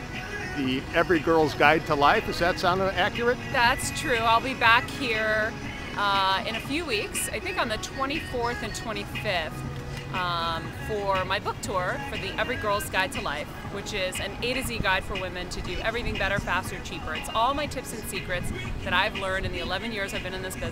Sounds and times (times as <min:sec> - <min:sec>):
Music: 0:00.0 - 0:20.7
Speech: 0:00.6 - 0:09.5, 0:10.2 - 0:20.7.